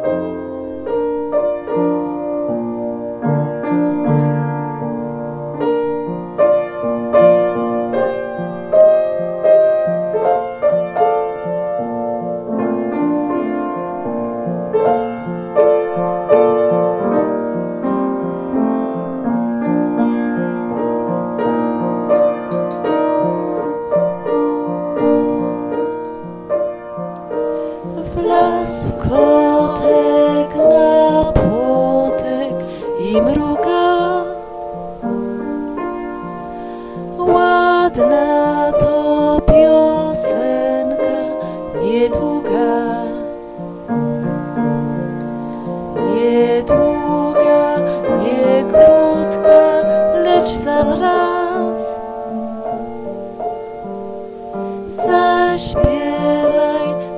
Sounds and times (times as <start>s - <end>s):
Music: 0.0s - 57.1s.